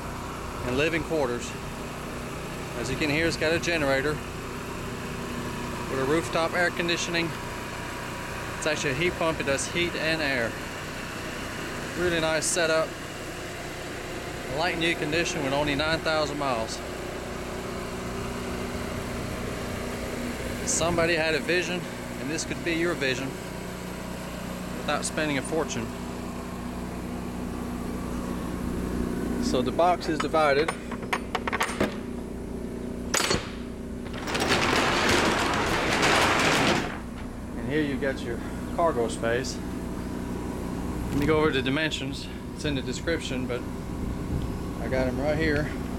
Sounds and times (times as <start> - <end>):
Speech: 0.6 - 1.6, 2.8 - 4.2, 5.9 - 7.4, 8.6 - 10.6, 12.0 - 12.9, 14.5 - 16.8, 20.6 - 23.4, 24.9 - 25.9, 29.4 - 30.8, 37.6 - 39.6, 41.1 - 43.7, 44.8 - 45.8.